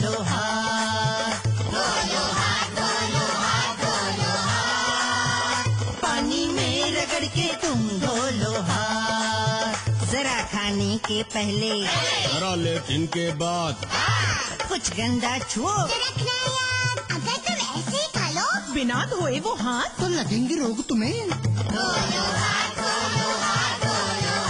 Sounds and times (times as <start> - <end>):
Music: 0.0 - 24.4.